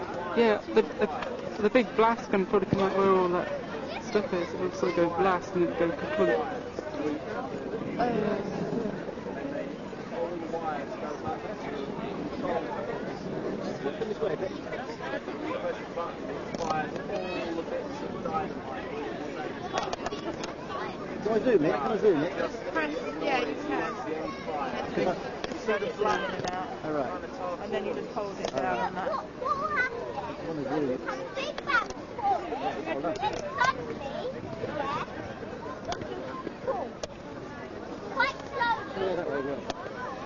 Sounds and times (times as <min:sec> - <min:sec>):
Chatter: 0:00.0 - 0:40.2
Outside, urban or manmade: 0:00.0 - 0:40.2.